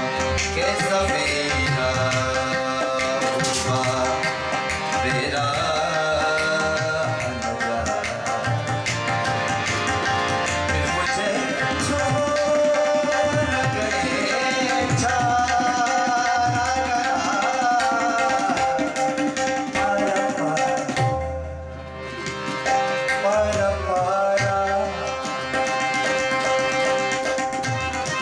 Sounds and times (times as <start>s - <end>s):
Tabla: 0.0s - 28.2s.